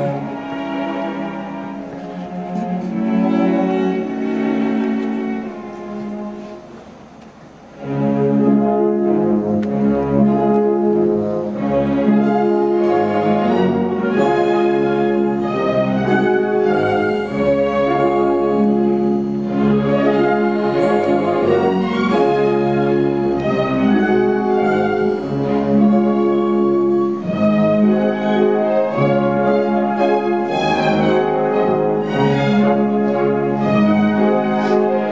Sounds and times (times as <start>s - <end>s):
Orchestra: 0.0s - 35.1s.